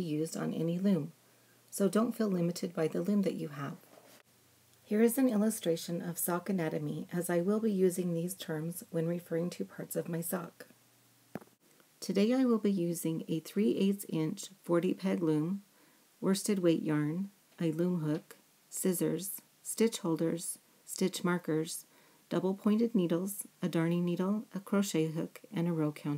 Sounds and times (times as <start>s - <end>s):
Speech: 0.0s - 3.9s, 4.9s - 10.7s, 12.0s - 15.6s, 16.2s - 26.1s.